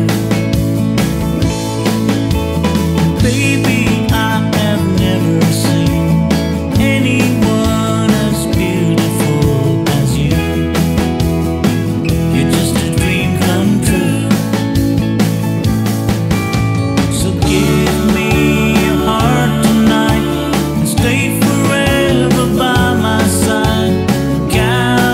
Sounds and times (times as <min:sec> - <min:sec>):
Country: 0:00.0 - 0:25.1
Funk: 0:00.0 - 0:25.1.